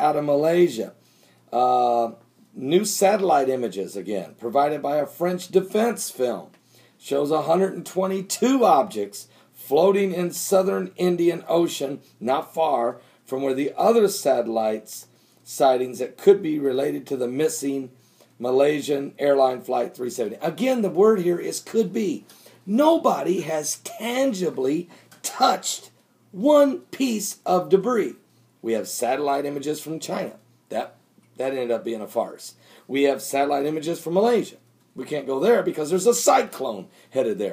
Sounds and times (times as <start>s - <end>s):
Speech: 0.0s - 37.5s.